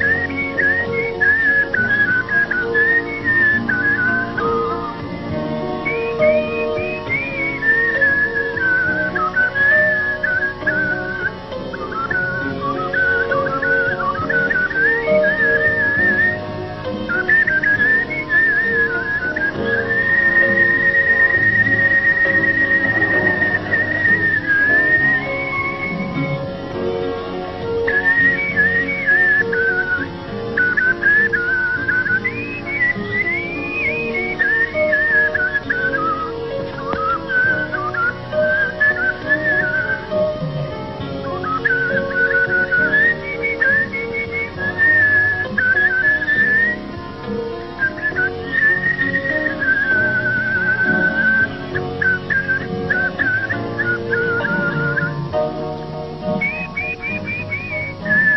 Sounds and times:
Music: 0.0 - 58.3
Whistling: 0.0 - 58.3.

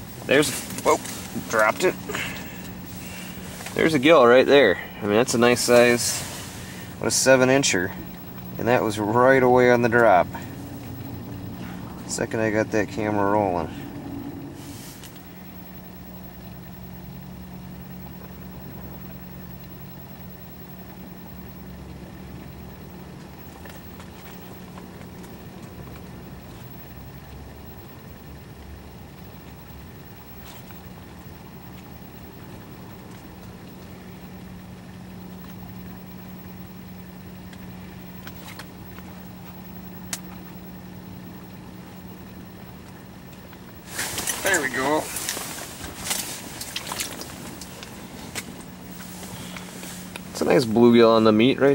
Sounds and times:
Speech: 0.3 - 2.0, 3.8 - 6.2, 7.0 - 8.0, 8.6 - 10.4, 12.1 - 13.8, 44.4 - 45.2, 50.4 - 51.7.

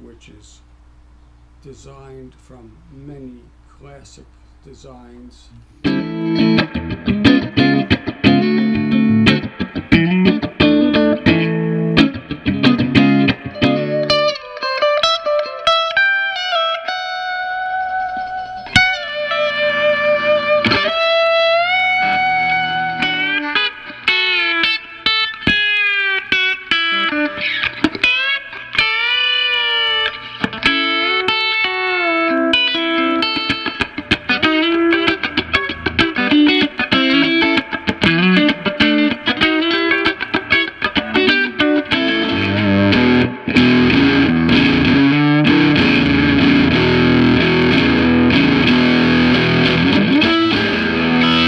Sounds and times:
Music: 5.8 - 51.4.

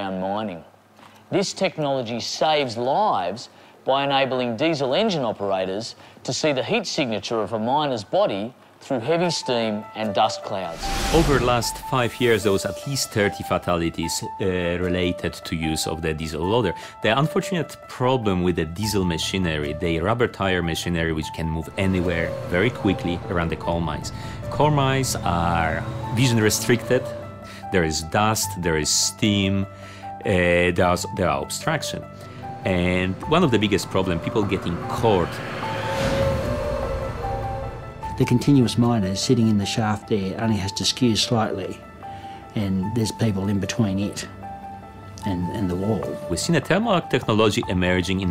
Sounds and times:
Music: 0.0 - 0.6, 1.4 - 48.3
Speech: 0.0 - 0.7, 1.3 - 27.1, 27.7 - 32.1, 32.7 - 35.4, 38.2 - 41.8, 42.6 - 44.3, 45.2 - 48.3.

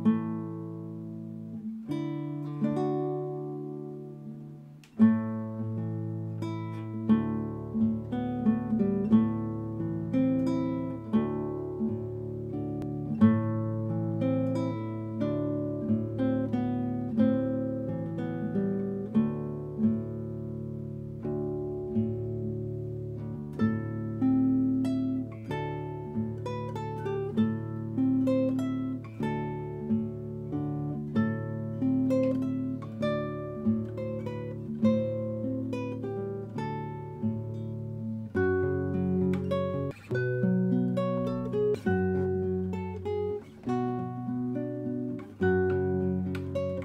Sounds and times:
Strum: 0.0 - 46.8.

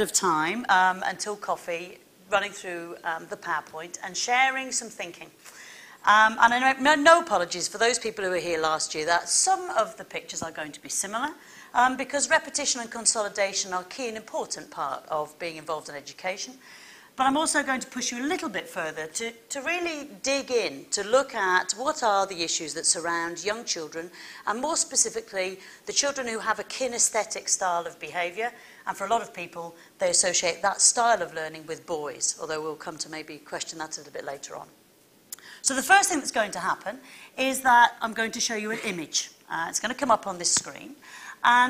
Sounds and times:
Speech: 0.0 - 5.4, 6.0 - 16.6, 17.2 - 34.7, 35.6 - 41.7.

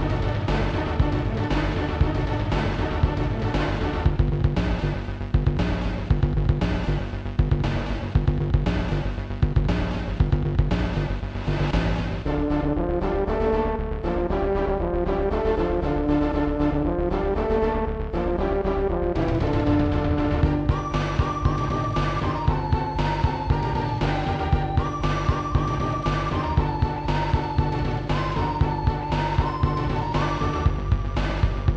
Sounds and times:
Music: 0.0 - 31.7.

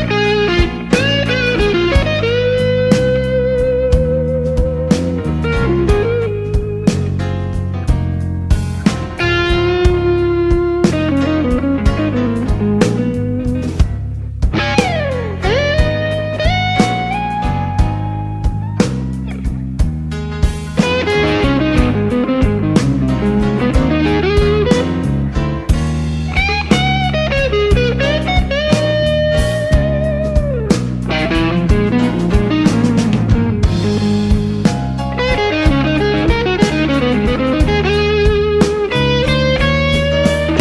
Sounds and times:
Music: 0.0 - 40.6.

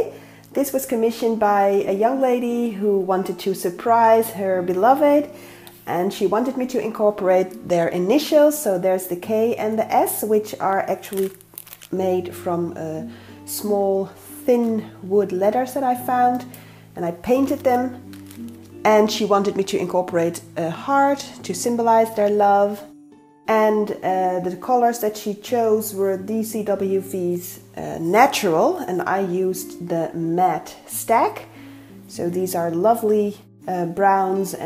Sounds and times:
Speech: 0.0 - 5.3, 5.9 - 11.3, 12.0 - 18.0, 18.8 - 22.9, 23.5 - 31.5, 32.1 - 34.6
Music: 0.0 - 34.6.

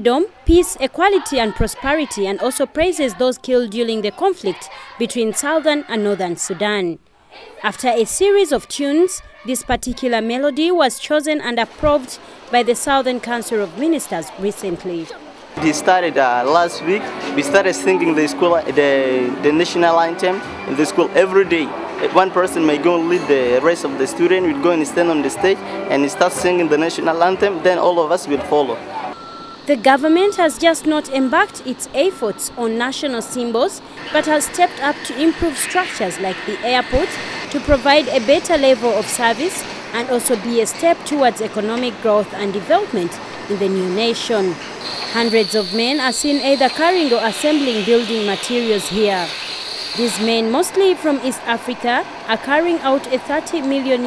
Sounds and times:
Speech: 0.0 - 7.0, 7.6 - 28.8, 29.7 - 44.6, 45.2 - 49.3, 50.0 - 54.0.

